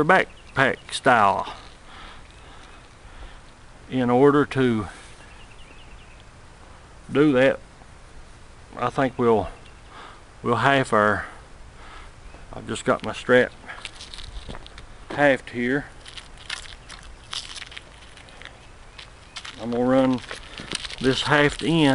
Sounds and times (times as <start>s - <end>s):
Speech: 0.0s - 1.6s, 3.9s - 5.0s, 7.1s - 7.6s, 8.8s - 9.6s, 10.4s - 11.4s, 12.5s - 13.6s, 15.1s - 15.9s, 19.6s - 20.3s, 21.0s - 21.9s
Walk, footsteps: 13.7s - 15.2s, 16.0s - 21.9s.